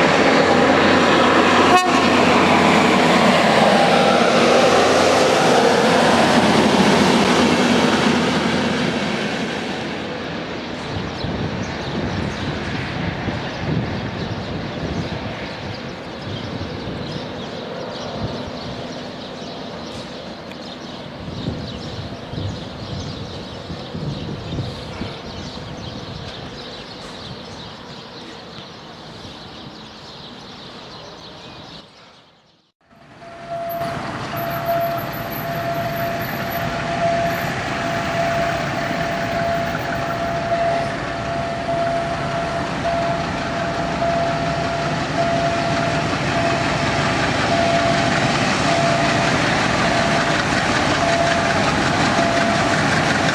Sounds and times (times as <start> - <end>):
Railroad car, train wagon: 0.0 - 53.3
Train: 0.0 - 53.3.